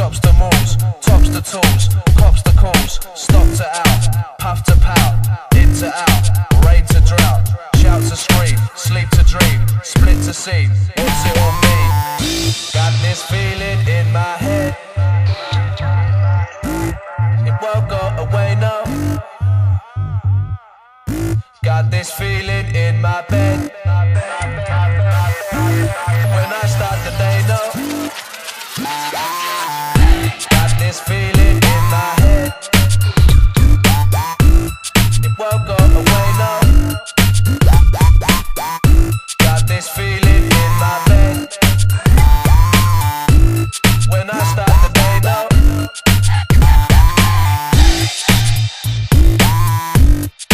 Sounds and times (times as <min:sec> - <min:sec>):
Hip hop music: 0:00.0 - 0:50.5.